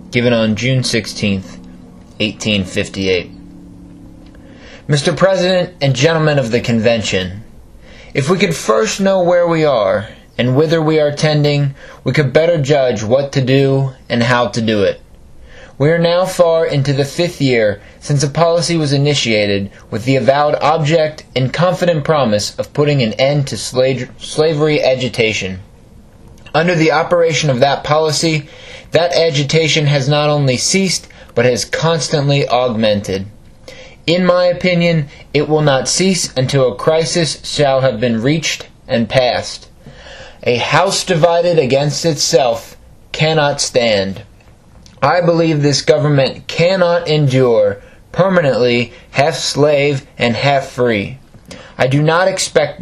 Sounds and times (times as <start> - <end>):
Male speech, man speaking: 0.0 - 1.6, 2.2 - 3.4, 4.9 - 7.5, 8.1 - 15.0, 15.8 - 25.7, 26.5 - 33.4, 34.0 - 39.7, 40.4 - 44.3, 45.0 - 51.2, 51.8 - 52.8
Narration, monologue: 0.0 - 52.8.